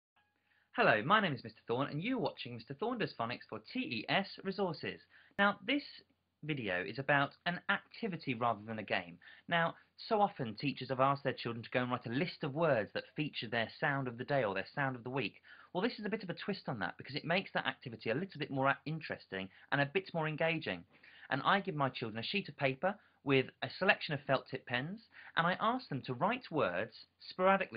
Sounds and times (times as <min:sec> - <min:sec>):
Inside, small room: 0:00.1 - 0:27.7
Speech: 0:00.8 - 0:27.7.